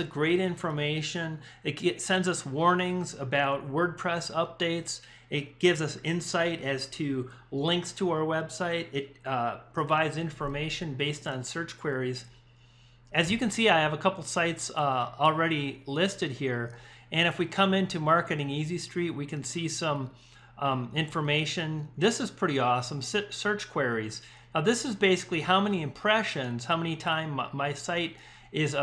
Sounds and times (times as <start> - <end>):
Speech: 0.0 - 12.3, 13.1 - 28.8.